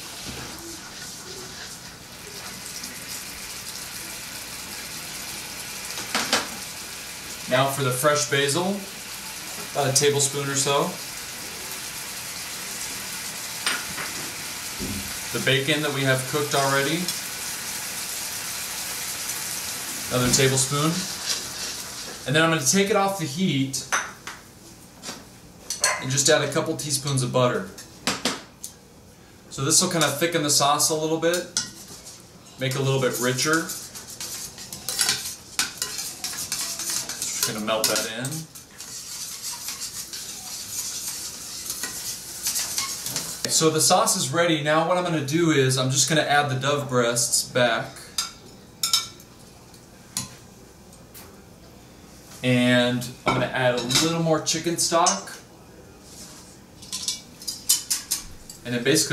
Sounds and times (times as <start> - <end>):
Cutlery, silverware: 34.6 - 38.4, 56.8 - 58.6.